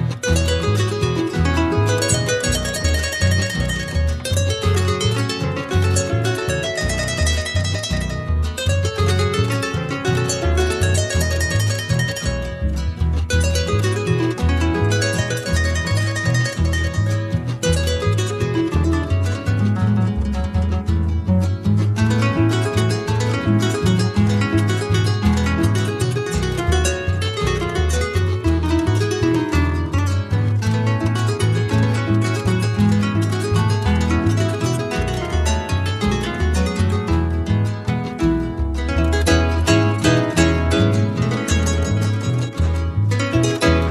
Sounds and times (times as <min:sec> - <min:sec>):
Musical instrument: 0:00.0 - 0:43.9.